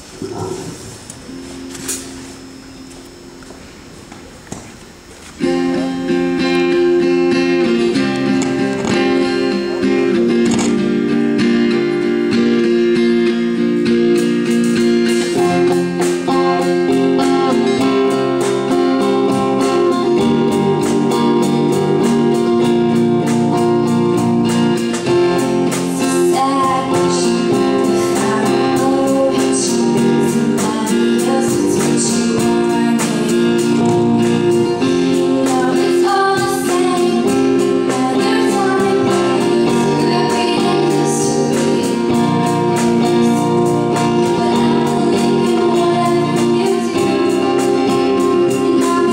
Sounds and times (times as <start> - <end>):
Music: 0.3 - 49.1
Female singing: 25.8 - 49.1.